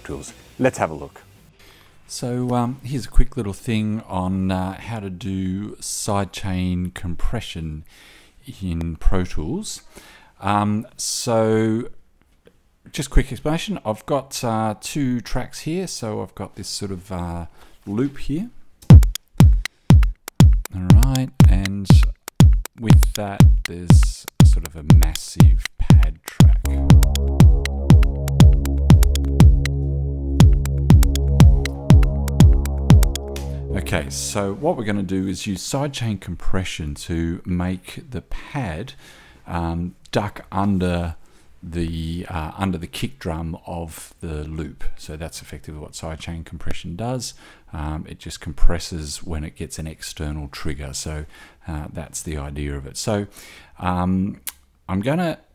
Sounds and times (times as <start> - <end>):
Speech: 0.0 - 1.3, 2.1 - 12.0, 12.9 - 18.6, 20.7 - 22.1, 22.8 - 26.8, 33.7 - 55.5
Music: 18.9 - 34.8.